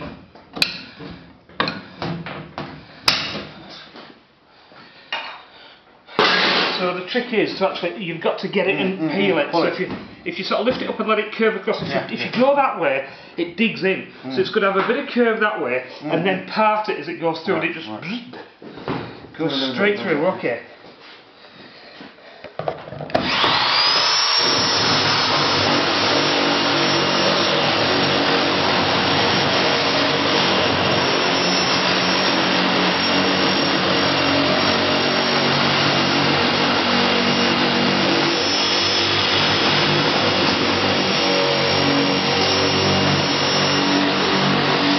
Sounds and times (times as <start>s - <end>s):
Speech: 6.8s - 18.5s, 19.4s - 20.8s.